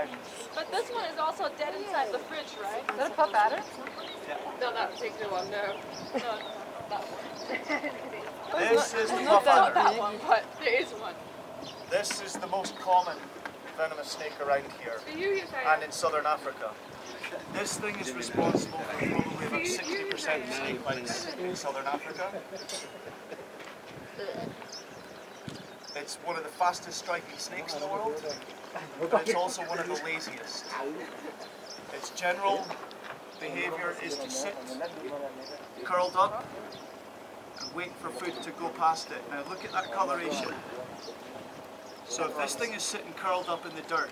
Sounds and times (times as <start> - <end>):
Outside, rural or natural: 0.0 - 44.1.